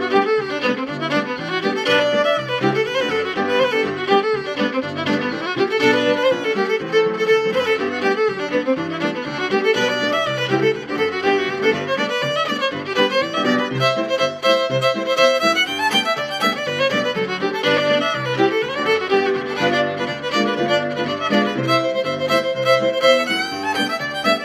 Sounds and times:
Violin, fiddle: 0:00.0 - 0:24.4.

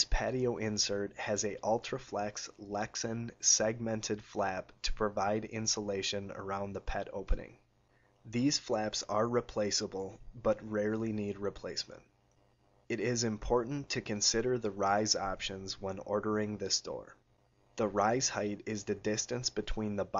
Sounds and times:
Speech: 0:00.0 - 0:07.6, 0:08.3 - 0:12.1, 0:12.9 - 0:17.2, 0:17.8 - 0:20.1.

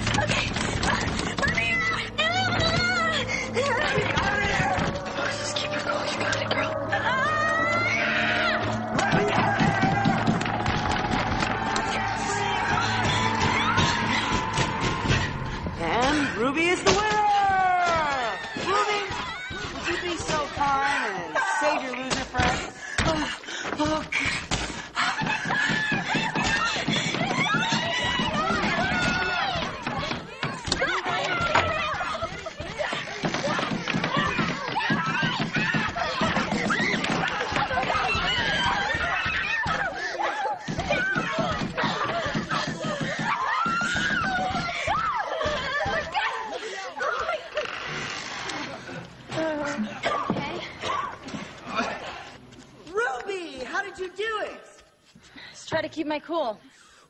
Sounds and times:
Crying, sobbing: 0:00.1 - 0:10.2, 0:23.0 - 0:47.8.

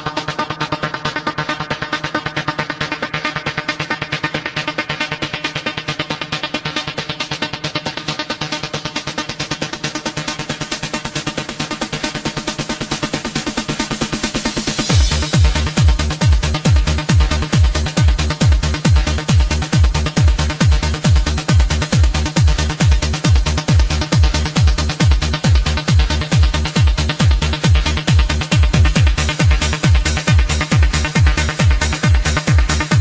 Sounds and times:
Music: 0:00.0 - 0:33.0.

